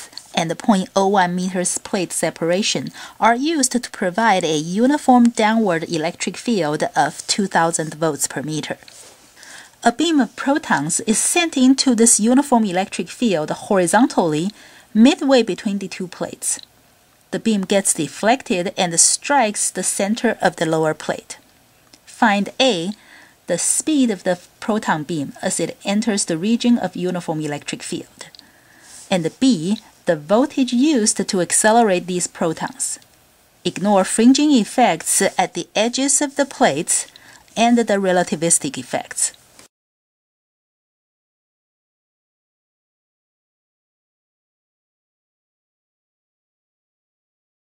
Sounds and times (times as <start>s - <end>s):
Speech: 0.0s - 8.9s, 9.8s - 16.6s, 17.3s - 21.4s, 22.1s - 28.4s, 29.0s - 33.0s, 33.7s - 39.4s.